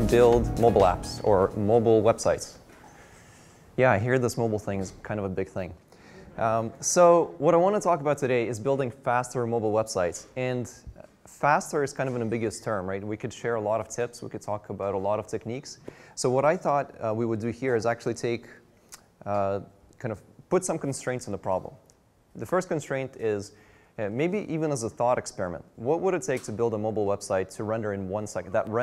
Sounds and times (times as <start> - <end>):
Speech: 0.0 - 2.6, 3.8 - 18.6, 19.2 - 28.8.